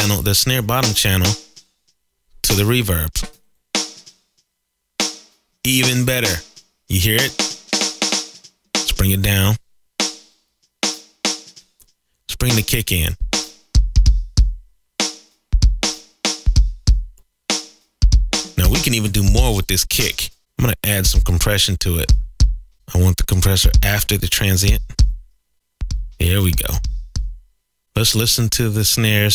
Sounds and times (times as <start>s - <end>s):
Drum machine: 0.0s - 1.7s, 3.2s - 4.2s, 5.1s - 20.4s, 21.0s - 27.5s.